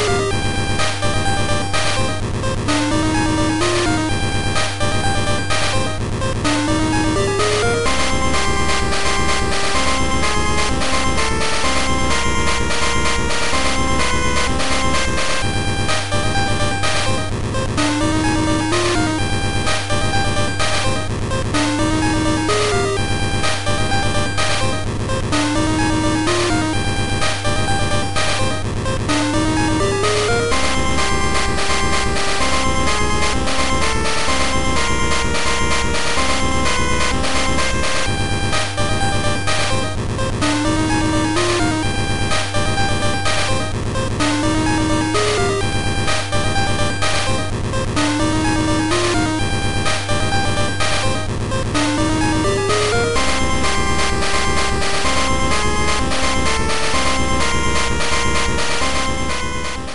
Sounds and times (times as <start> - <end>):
Music: 0.0 - 59.9
Sound effect: 0.0 - 59.9.